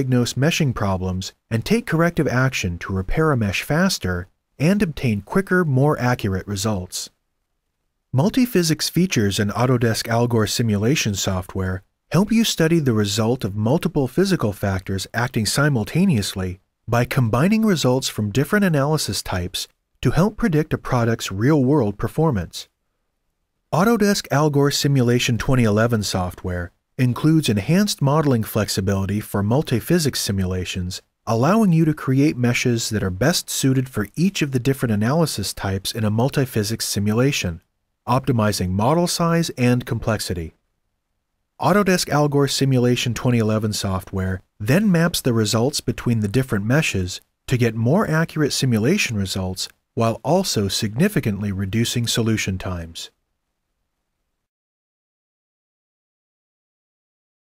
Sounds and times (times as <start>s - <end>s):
Speech: 0.0s - 7.2s, 8.2s - 22.7s, 23.7s - 40.6s, 41.6s - 53.2s.